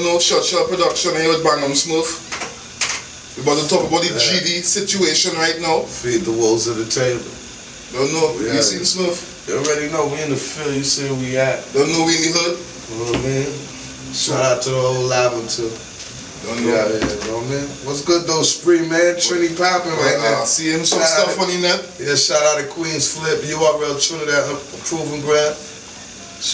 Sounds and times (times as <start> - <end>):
Speech: 0.0 - 2.2, 3.4 - 15.8, 16.4 - 26.5.